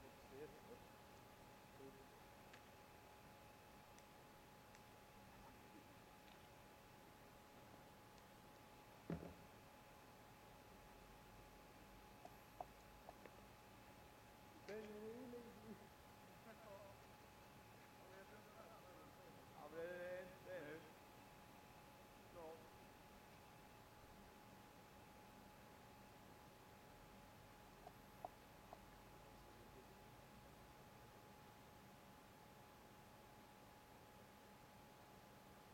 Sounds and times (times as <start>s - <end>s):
Speech: 0.0s - 0.9s, 1.7s - 2.2s, 14.6s - 17.0s, 18.0s - 21.0s, 22.3s - 22.7s.